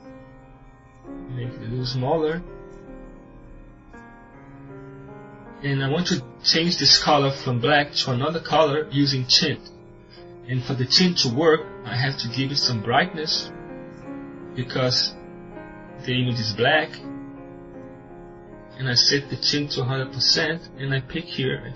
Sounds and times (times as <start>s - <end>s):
Narration, monologue: 1.0s - 21.7s.